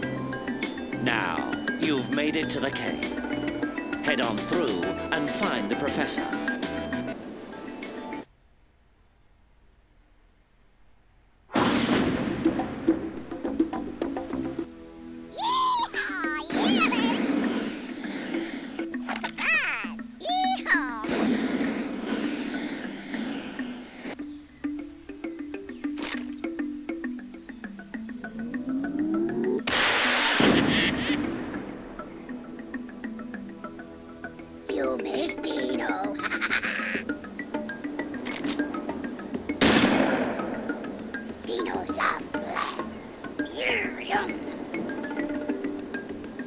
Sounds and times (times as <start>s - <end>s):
Music: 0.0s - 8.3s, 12.0s - 46.4s
Speech: 1.0s - 3.1s, 4.0s - 6.3s, 15.4s - 17.2s, 19.4s - 21.1s, 34.7s - 36.2s, 41.5s - 42.8s, 43.5s - 44.4s.